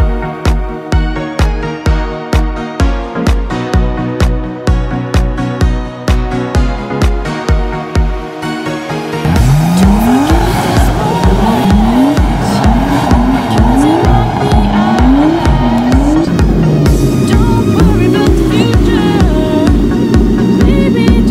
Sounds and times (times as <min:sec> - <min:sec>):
Music: 0:00.0 - 0:21.3
Car: 0:06.4 - 0:21.3.